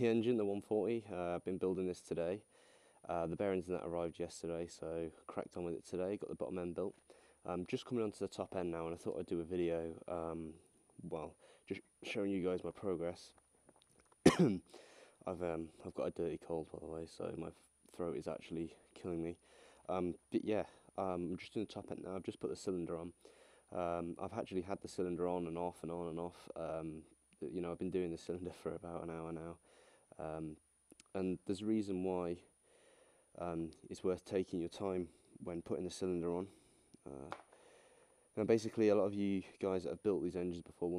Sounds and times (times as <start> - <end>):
Speech: 0.0 - 2.5, 3.1 - 13.4, 15.2 - 29.6, 30.2 - 32.5, 33.4 - 37.4, 38.4 - 40.9.